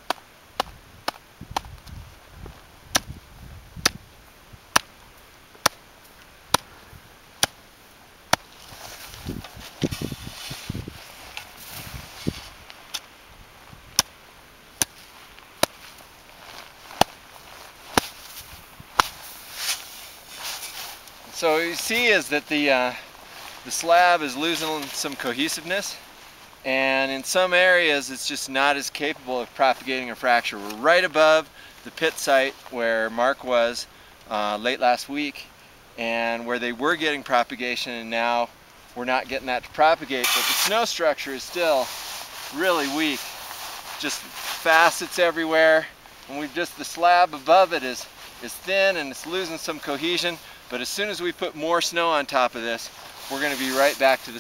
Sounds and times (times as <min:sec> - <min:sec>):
Speech: 0:21.3 - 0:23.0, 0:23.6 - 0:26.0, 0:26.7 - 0:41.9, 0:42.5 - 0:43.3, 0:44.0 - 0:54.4.